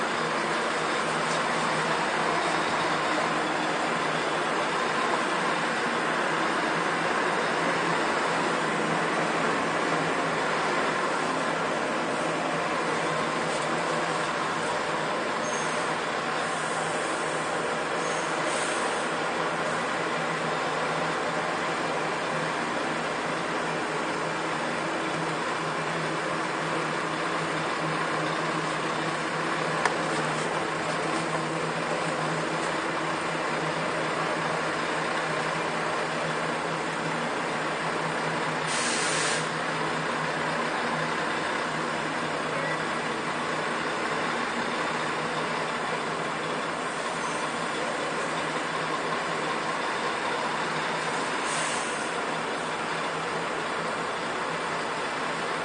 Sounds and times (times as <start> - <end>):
Truck: 0.0 - 55.6.